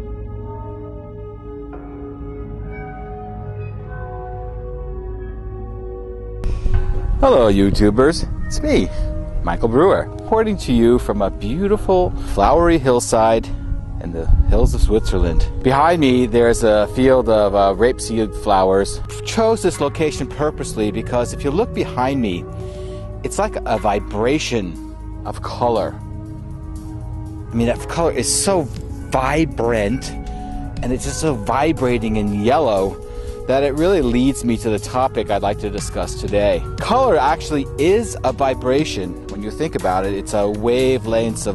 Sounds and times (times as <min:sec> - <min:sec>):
Music: 0:00.0 - 0:41.5
Speech: 0:07.2 - 0:08.9, 0:09.5 - 0:22.4, 0:23.2 - 0:26.0, 0:27.6 - 0:30.2, 0:30.8 - 0:41.5.